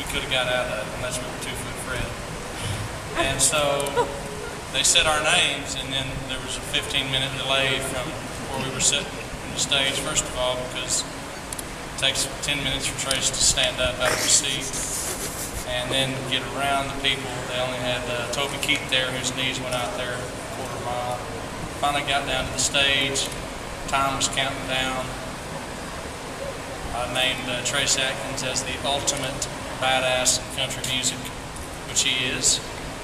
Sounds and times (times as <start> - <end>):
Speech: 0.0 - 4.1, 4.8 - 11.1, 12.0 - 15.0, 15.7 - 25.2, 27.0 - 32.7.